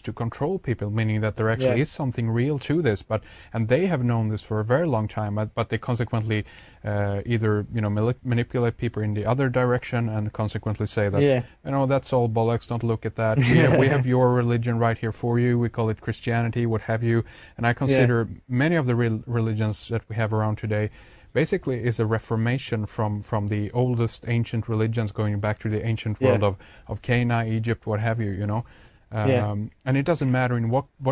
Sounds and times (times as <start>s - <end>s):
Speech: 0.0s - 31.1s.